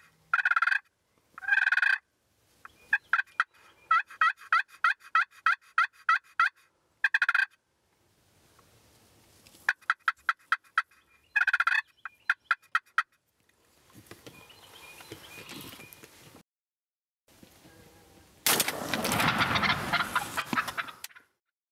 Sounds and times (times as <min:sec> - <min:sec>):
Gobble: 0:00.3 - 0:02.0, 0:02.9 - 0:07.6, 0:09.7 - 0:13.2, 0:19.2 - 0:21.3.